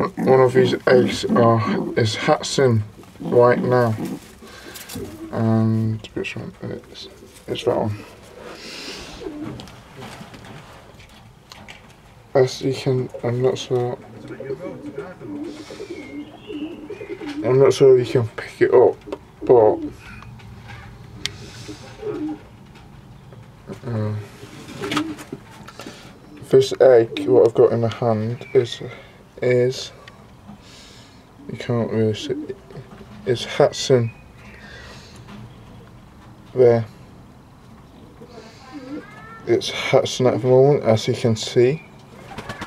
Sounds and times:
Speech: 0:00.0 - 0:04.1, 0:05.3 - 0:08.0, 0:12.4 - 0:15.4, 0:17.4 - 0:20.0, 0:26.4 - 0:30.0, 0:31.5 - 0:32.6, 0:33.3 - 0:34.2, 0:36.6 - 0:37.0, 0:38.3 - 0:41.9.

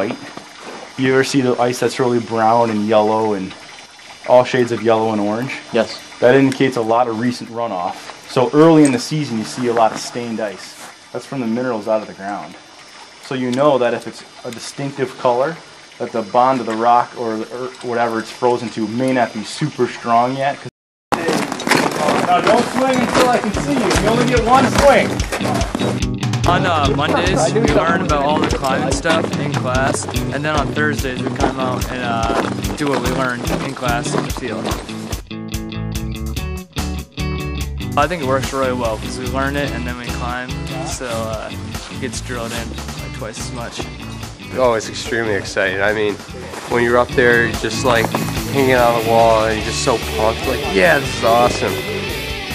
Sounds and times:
Outside, rural or natural: 0:00.0 - 0:35.3, 0:38.1 - 0:52.5
Speech: 0:01.0 - 0:03.6, 0:04.3 - 0:12.6, 0:13.2 - 0:21.4, 0:22.0 - 0:25.7, 0:26.4 - 0:34.8, 0:38.0 - 0:43.8, 0:44.5 - 0:52.0
Music: 0:23.1 - 0:52.5.

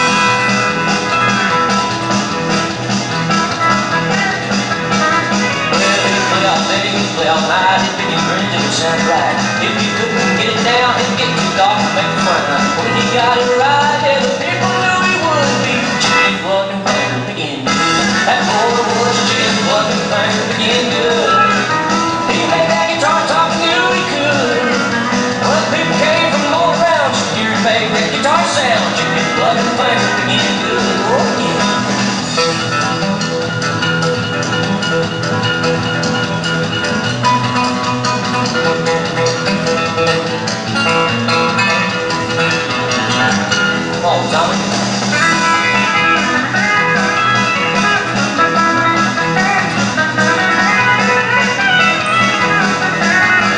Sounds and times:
Music: 0:00.0 - 0:53.5.

